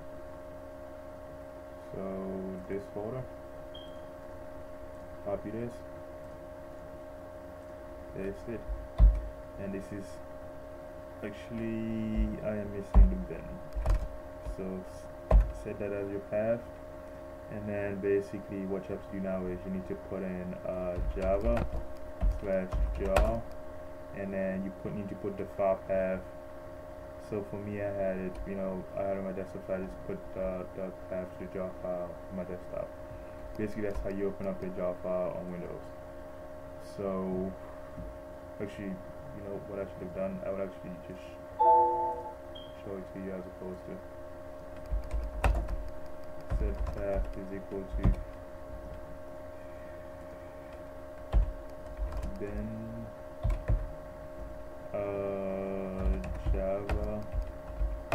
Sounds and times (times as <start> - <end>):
Speech: 1.9 - 3.3, 5.2 - 5.9, 8.2 - 8.7, 9.6 - 10.2, 11.2 - 13.6, 14.5 - 16.7, 17.5 - 21.7, 22.4 - 23.5, 24.2 - 26.3, 27.2 - 32.9, 33.6 - 35.9, 36.8 - 37.6, 38.6 - 41.4, 42.8 - 44.0, 46.6 - 48.2, 52.3 - 53.1, 55.0 - 57.3.